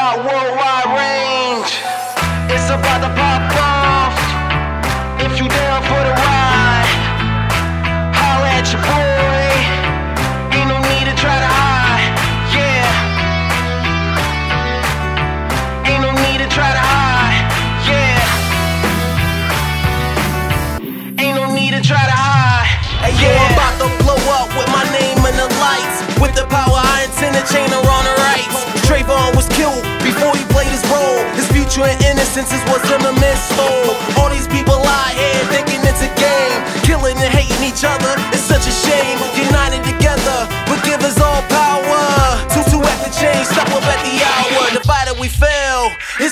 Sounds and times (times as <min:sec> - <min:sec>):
Music: 0:00.0 - 0:46.3.